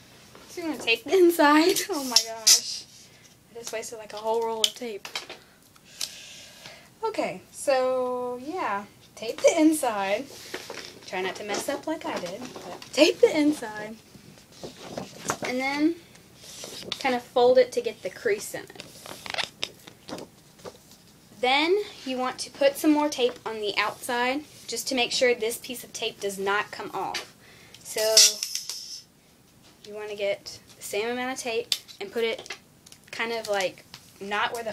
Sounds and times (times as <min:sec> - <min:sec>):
Inside, small room: 0:00.0 - 0:34.7
Speech: 0:00.5 - 0:02.9, 0:11.1 - 0:14.0, 0:17.0 - 0:18.7, 0:29.8 - 0:32.5, 0:33.1 - 0:34.7.